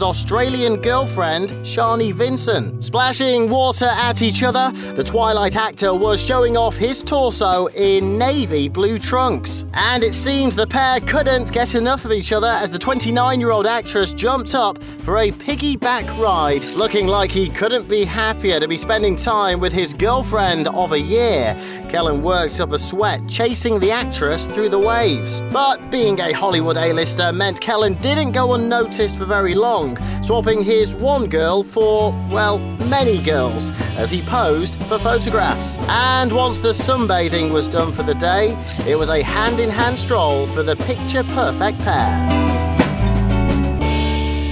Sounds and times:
Speech: 0:00.0 - 0:42.4
Music: 0:00.0 - 0:44.5.

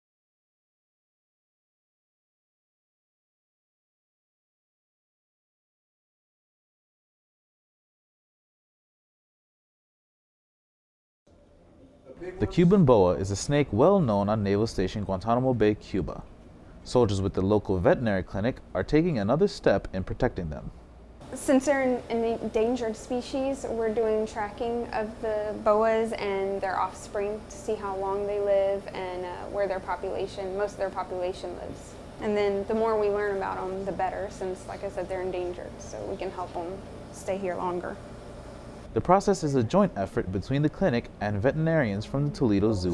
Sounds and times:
Speech: 0:12.0 - 0:16.3, 0:16.9 - 0:20.7, 0:21.3 - 0:38.0, 0:39.0 - 0:42.9.

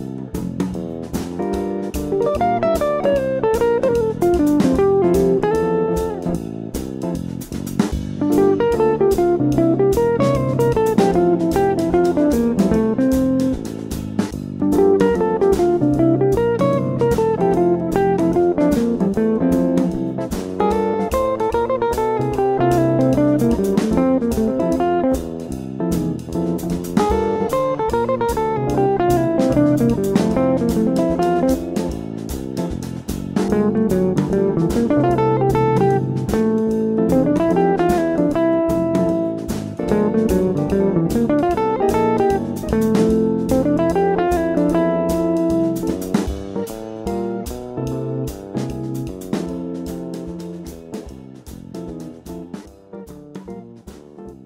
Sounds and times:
Electric guitar: 0:00.0 - 0:54.4
Strum: 0:00.0 - 0:54.4.

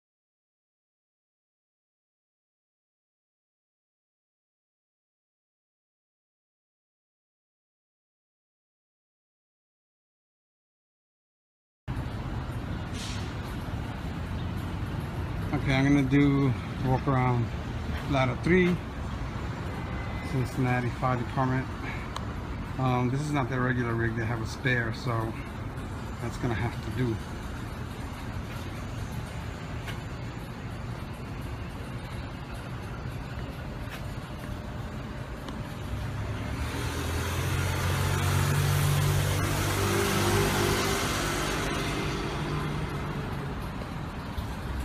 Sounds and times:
Vehicle: 0:11.9 - 0:44.8
Speech: 0:15.5 - 0:18.8, 0:20.2 - 0:22.0, 0:22.8 - 0:25.4, 0:26.2 - 0:27.3.

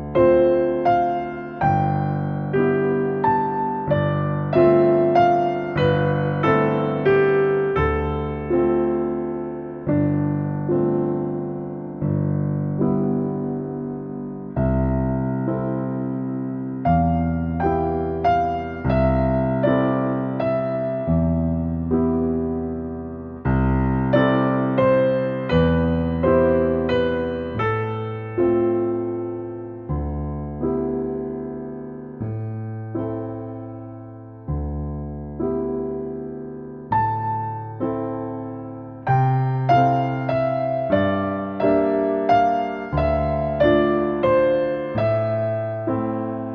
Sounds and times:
Music: 0:00.0 - 0:46.5.

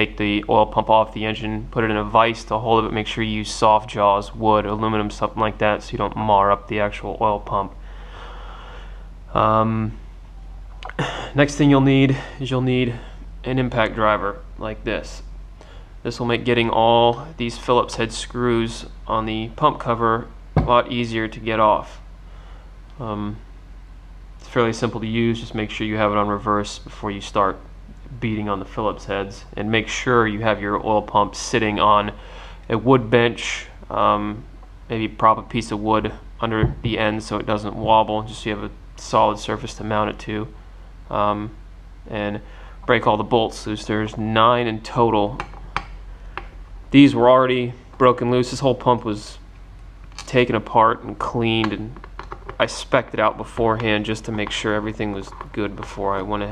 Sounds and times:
Speech: 0:00.0 - 0:07.8, 0:09.3 - 0:10.0, 0:10.8 - 0:15.3, 0:16.0 - 0:22.0, 0:23.0 - 0:23.4, 0:24.4 - 0:45.5, 0:46.9 - 0:49.4, 0:50.2 - 0:52.0, 0:52.6 - 0:56.5.

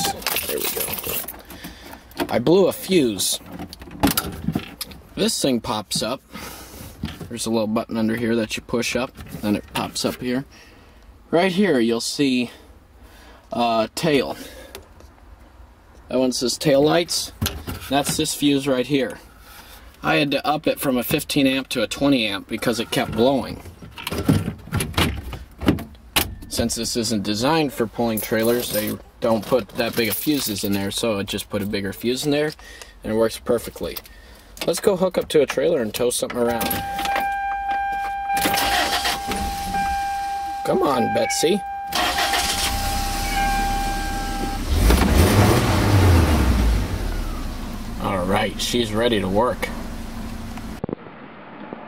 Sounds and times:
Speech: 0:02.3 - 0:03.5, 0:05.2 - 0:06.2, 0:07.3 - 0:10.5, 0:11.3 - 0:12.6, 0:13.5 - 0:14.4, 0:16.1 - 0:19.2, 0:20.0 - 0:23.7, 0:26.5 - 0:34.0, 0:34.6 - 0:36.8, 0:40.6 - 0:41.6, 0:48.0 - 0:49.8
Car: 0:35.5 - 0:51.8.

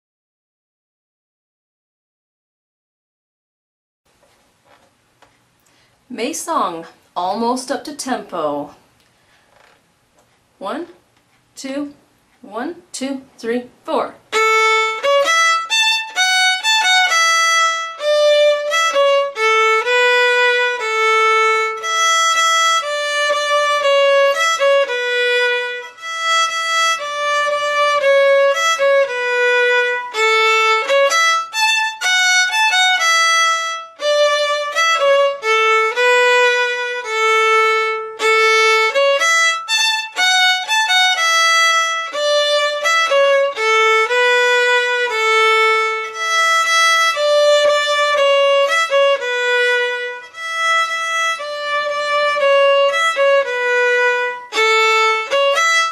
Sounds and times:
Violin, fiddle: 0:14.3 - 0:55.9.

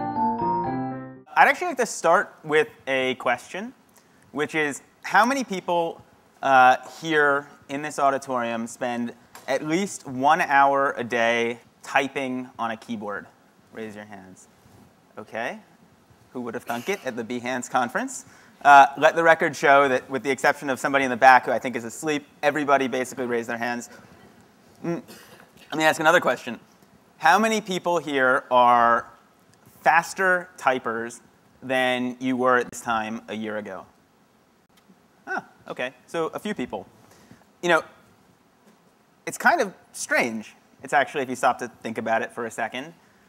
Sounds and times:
Speech: 0:01.3 - 0:03.8, 0:04.4 - 0:14.5, 0:15.2 - 0:15.7, 0:16.4 - 0:25.1, 0:25.7 - 0:26.6, 0:27.2 - 0:29.2, 0:29.8 - 0:33.9, 0:35.3 - 0:36.9, 0:37.6 - 0:37.9, 0:39.3 - 0:43.0.

